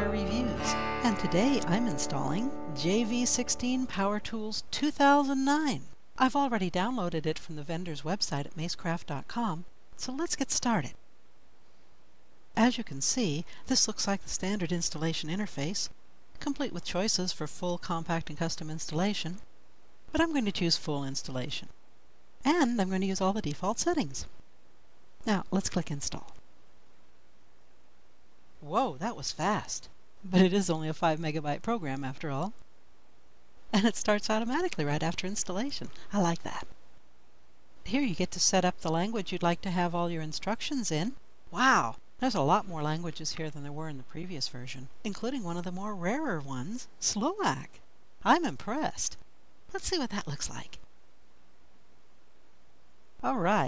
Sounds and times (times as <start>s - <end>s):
Speech: 0.0s - 11.0s, 12.6s - 19.4s, 20.1s - 21.7s, 22.4s - 24.3s, 25.2s - 26.4s, 28.6s - 32.6s, 33.7s - 36.7s, 37.8s - 50.8s, 53.2s - 53.6s.